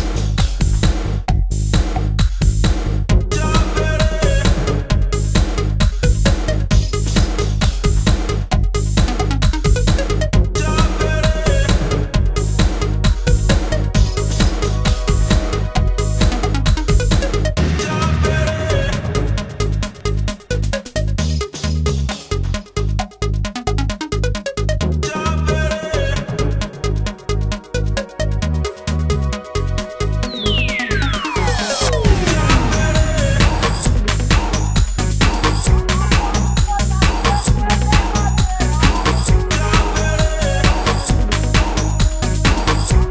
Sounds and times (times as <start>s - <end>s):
Electronica: 0.0s - 43.1s.